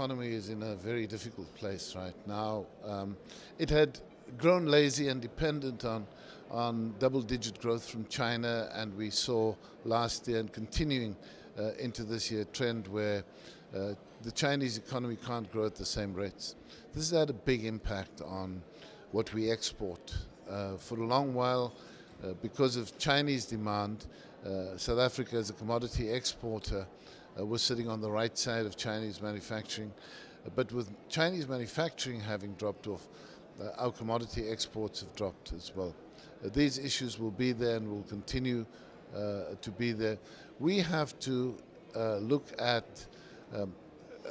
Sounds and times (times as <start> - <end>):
Male speech, man speaking: 0.0 - 44.3
Narration, monologue: 0.0 - 44.3.